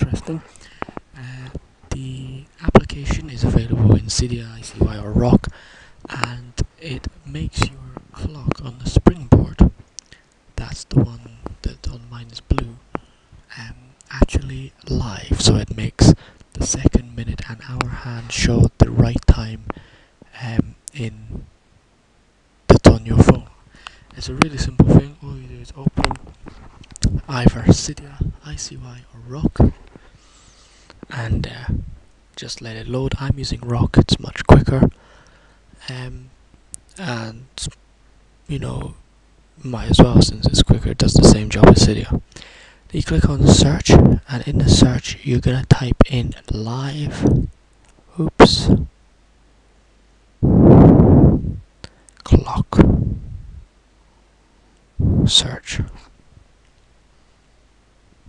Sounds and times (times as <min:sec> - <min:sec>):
Speech: 0:00.0 - 0:00.6, 0:01.2 - 0:09.8, 0:10.6 - 0:12.8, 0:13.5 - 0:21.5, 0:22.7 - 0:26.2, 0:27.0 - 0:29.8, 0:31.1 - 0:31.8, 0:32.4 - 0:35.0, 0:35.8 - 0:37.8, 0:38.5 - 0:39.0, 0:39.6 - 0:42.3, 0:42.9 - 0:47.5, 0:48.1 - 0:48.9, 0:52.2 - 0:53.0, 0:55.2 - 0:56.1.